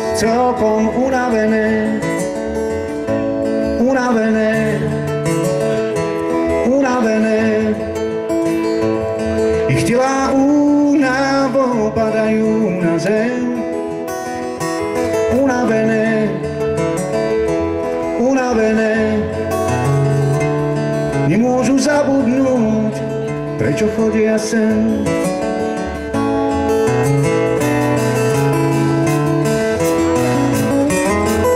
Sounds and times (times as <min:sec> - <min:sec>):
Music: 0:00.0 - 0:31.5.